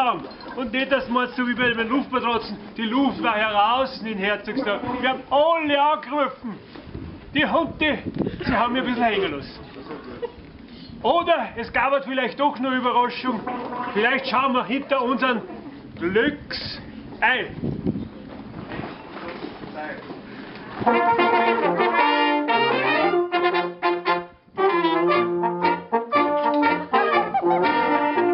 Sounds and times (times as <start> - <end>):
Speech: 0.0 - 6.6, 7.4 - 10.3, 11.0 - 17.6, 19.2 - 20.1.